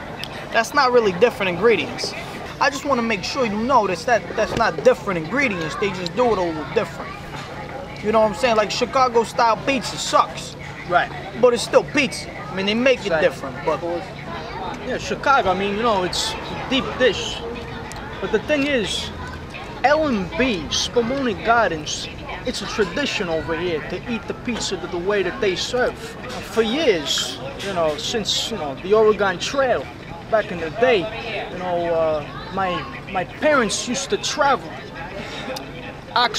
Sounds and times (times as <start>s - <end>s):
Speech: 0.0s - 36.3s.